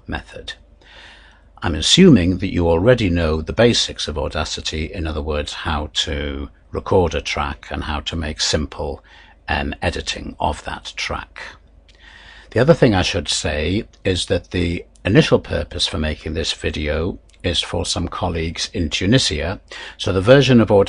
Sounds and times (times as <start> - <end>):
Speech: 0.0 - 0.6, 1.6 - 11.6, 12.5 - 20.8.